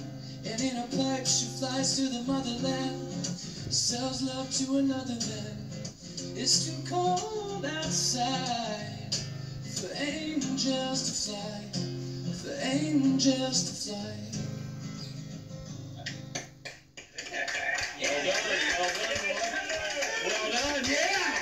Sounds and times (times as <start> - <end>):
Male singing: 0.0 - 5.8, 6.4 - 11.8, 12.4 - 14.4
Music: 0.0 - 16.9.